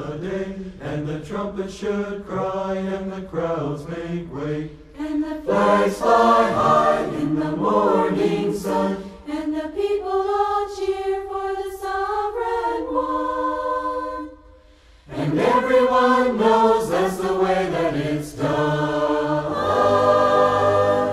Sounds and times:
Music: 0:04.7 - 0:21.1.

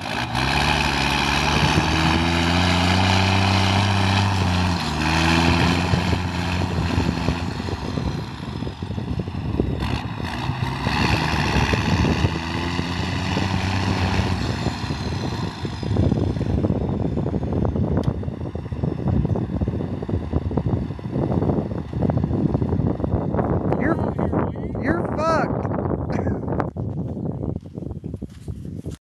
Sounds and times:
Truck: 0:00.0 - 0:29.0
Speech: 0:23.8 - 0:24.2, 0:24.8 - 0:25.6.

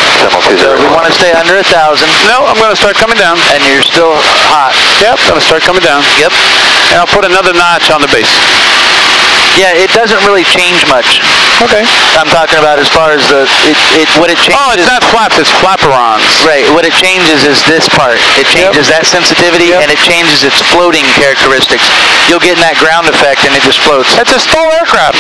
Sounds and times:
Speech: 0:00.2 - 0:08.4, 0:09.6 - 0:25.2.

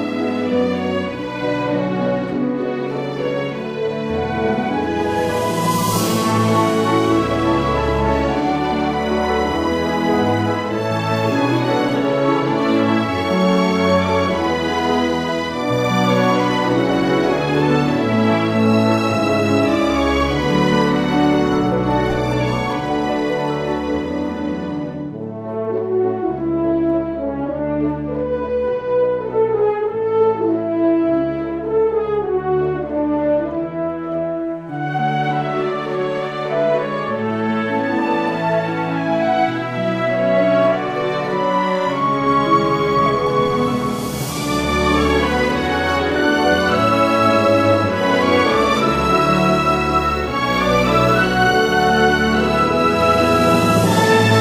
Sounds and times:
Music: 0:00.0 - 0:54.4.

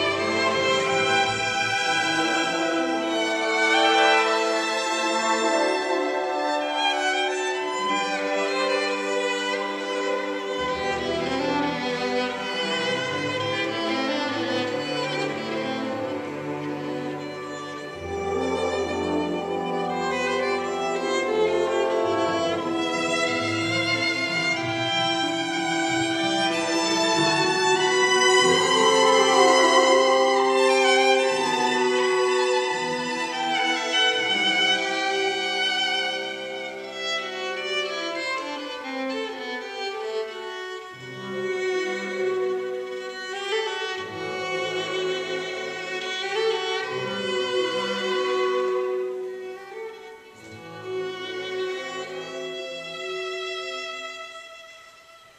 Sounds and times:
Pizzicato: 0:00.0 - 0:55.3.

